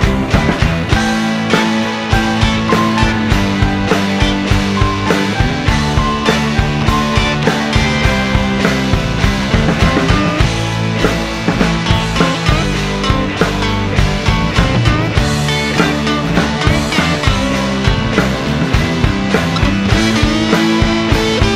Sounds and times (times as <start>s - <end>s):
Grunge: 0.0s - 21.5s.